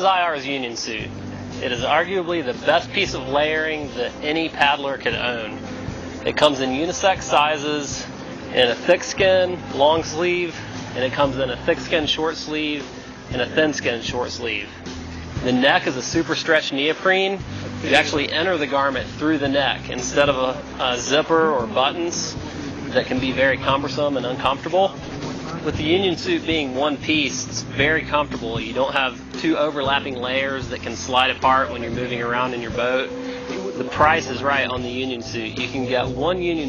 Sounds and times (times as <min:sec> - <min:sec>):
Speech: 0:00.0 - 0:05.6, 0:06.2 - 0:14.8, 0:15.4 - 0:36.6.